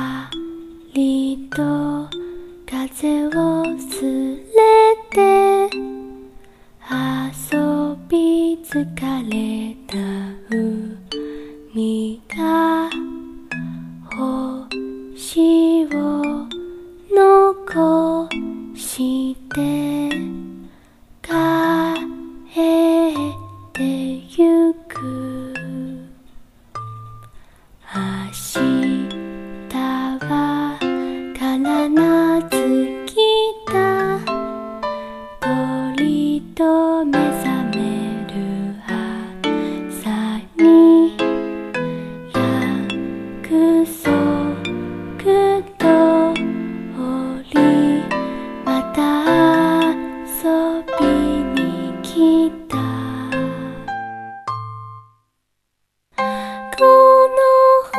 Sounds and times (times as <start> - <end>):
Music: 0.0 - 55.5, 56.1 - 57.9
Female singing: 1.0 - 5.9, 6.9 - 13.0, 14.1 - 20.4, 21.2 - 26.1, 27.9 - 29.1, 29.7 - 34.4, 35.4 - 41.3, 42.4 - 53.6, 56.7 - 57.9.